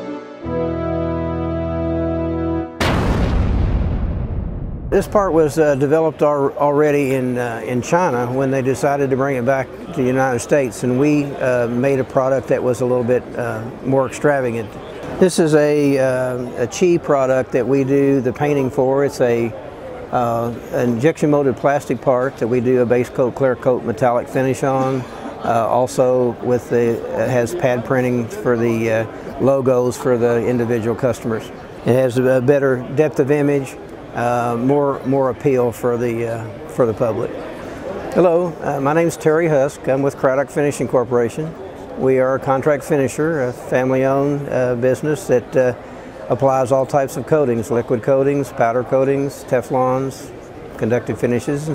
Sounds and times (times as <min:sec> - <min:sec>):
Speech: 0:05.0 - 0:37.4, 0:38.1 - 0:51.7.